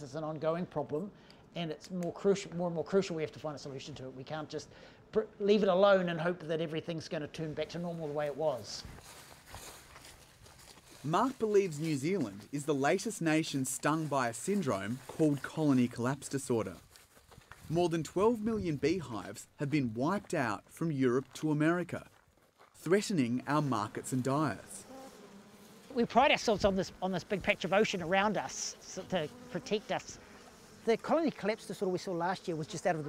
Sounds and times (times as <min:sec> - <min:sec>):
Speech: 0:00.0 - 0:08.9, 0:11.0 - 0:16.8, 0:17.7 - 0:22.1, 0:22.8 - 0:24.8, 0:25.9 - 0:30.2, 0:30.8 - 0:33.0
Outside, rural or natural: 0:00.0 - 0:33.0.